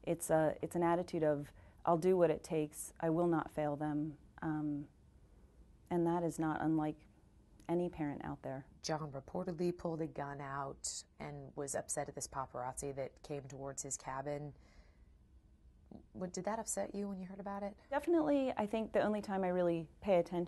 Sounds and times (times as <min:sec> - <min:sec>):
Speech: 0:00.0 - 0:04.9, 0:05.9 - 0:07.0, 0:07.7 - 0:14.6, 0:15.9 - 0:20.4.